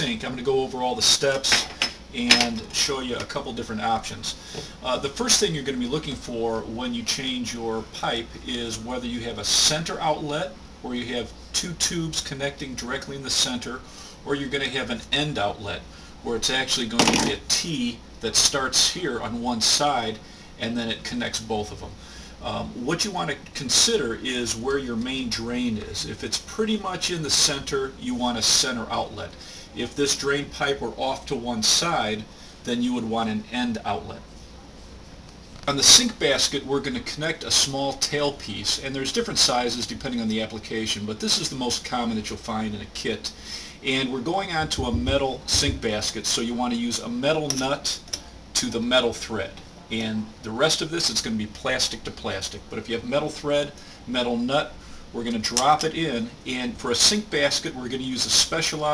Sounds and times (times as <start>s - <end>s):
Speech: 0.0s - 34.3s, 35.6s - 58.9s.